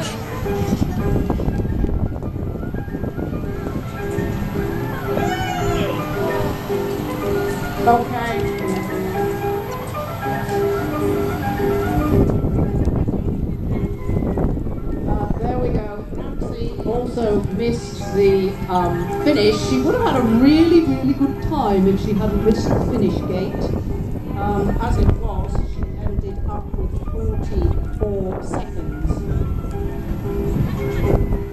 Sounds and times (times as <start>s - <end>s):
Music: 0.0s - 31.5s.